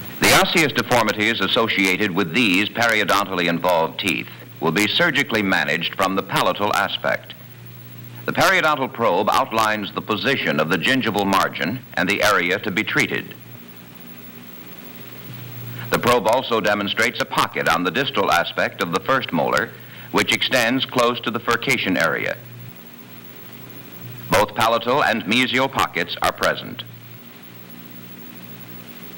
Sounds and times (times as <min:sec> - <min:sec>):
Speech: 0:00.2 - 0:07.4, 0:08.3 - 0:13.4, 0:15.9 - 0:22.4, 0:24.3 - 0:26.9.